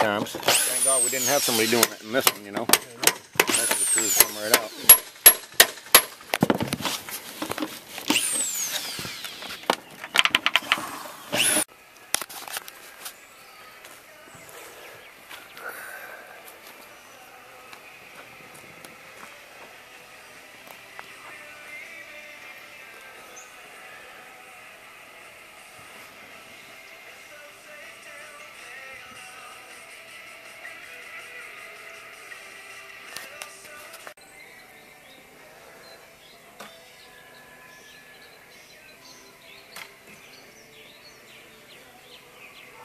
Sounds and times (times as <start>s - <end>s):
Music: 0.0s - 6.2s, 11.9s - 42.8s
Outside, rural or natural: 0.0s - 42.8s
Bird vocalization, bird call, bird song: 13.1s - 15.7s, 23.2s - 23.6s, 34.2s - 42.8s.